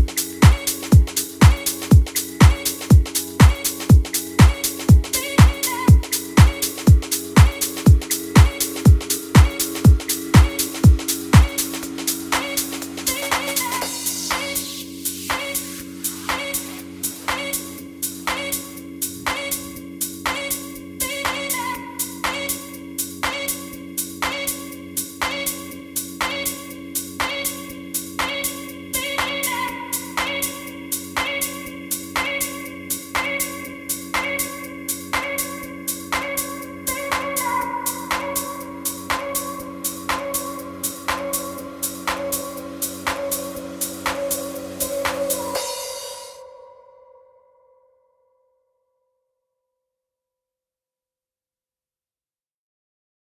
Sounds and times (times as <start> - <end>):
Electronic music: 0.0 - 23.7, 24.3 - 46.8.